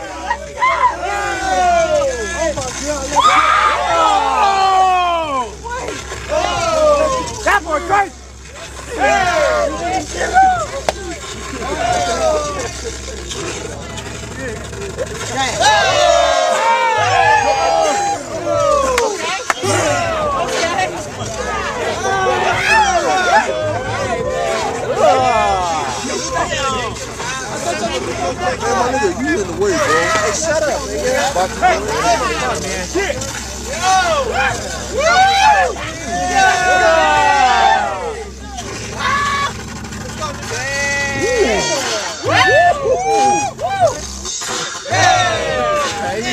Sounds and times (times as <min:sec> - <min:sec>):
Outside, urban or manmade: 0:00.0 - 0:46.3.